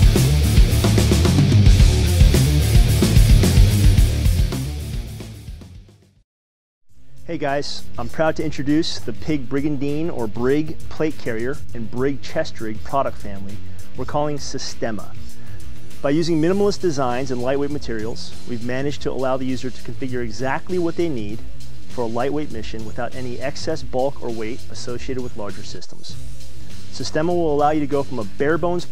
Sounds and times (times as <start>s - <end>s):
Music: 0.0s - 6.2s, 6.9s - 28.9s
Speech: 7.2s - 15.3s, 16.0s - 26.2s, 26.9s - 28.9s.